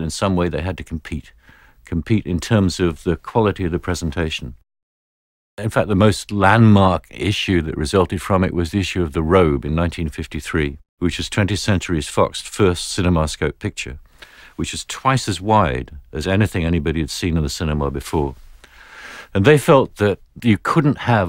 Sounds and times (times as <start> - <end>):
Speech: 0.0 - 4.6, 5.6 - 14.0, 14.6 - 18.4, 19.3 - 21.2.